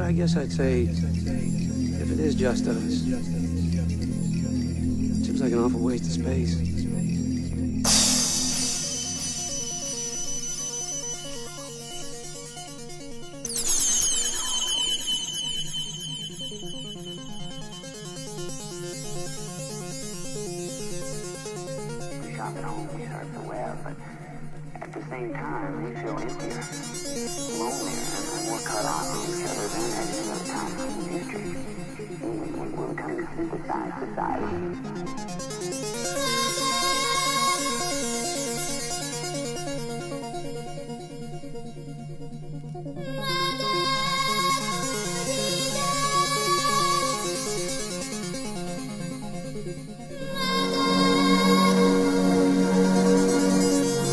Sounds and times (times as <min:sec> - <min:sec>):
Speech: 0:00.0 - 0:04.0, 0:05.2 - 0:07.1, 0:22.3 - 0:26.6, 0:27.5 - 0:34.7
Music: 0:00.0 - 0:54.1.